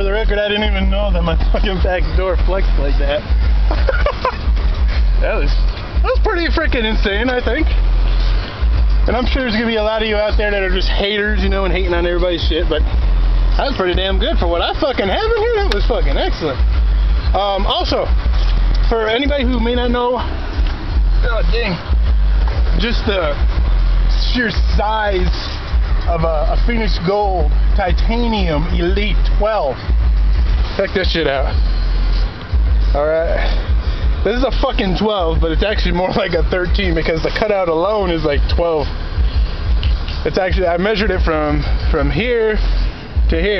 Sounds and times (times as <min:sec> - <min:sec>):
Speech: 0:00.0 - 0:03.4, 0:05.2 - 0:07.8, 0:09.0 - 0:12.9, 0:13.5 - 0:18.2, 0:18.8 - 0:20.4, 0:21.2 - 0:22.0, 0:22.7 - 0:29.8, 0:30.7 - 0:31.6, 0:32.8 - 0:39.0, 0:40.2 - 0:43.5
Car: 0:00.0 - 0:43.5.